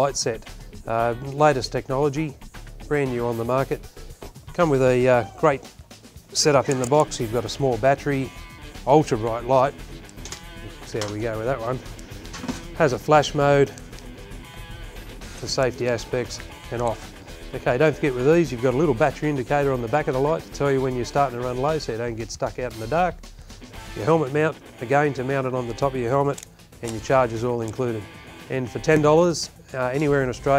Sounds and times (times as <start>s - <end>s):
Speech: 0.0s - 2.3s, 2.9s - 3.8s, 4.6s - 5.6s, 6.3s - 8.3s, 8.9s - 9.8s, 10.8s - 11.8s, 12.8s - 13.7s, 15.4s - 17.0s, 17.6s - 23.2s, 24.0s - 30.5s
Music: 0.0s - 30.5s.